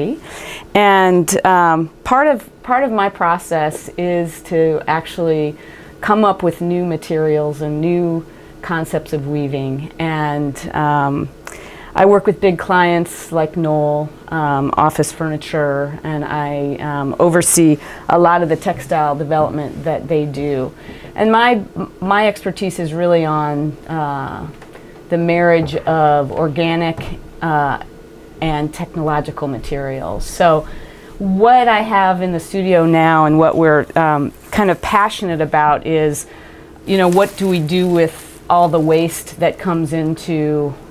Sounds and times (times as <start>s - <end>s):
Speech: 0.0s - 0.2s, 0.8s - 11.4s, 12.0s - 36.3s, 36.9s - 40.8s.